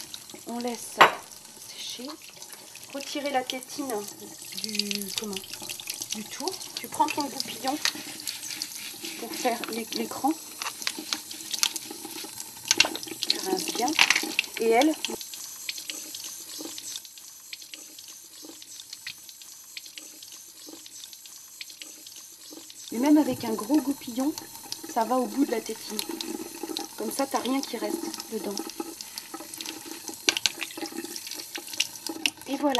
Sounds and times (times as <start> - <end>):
Sink (filling or washing): 0.0 - 32.7
Water: 0.0 - 32.7
Water tap, faucet: 0.0 - 32.7.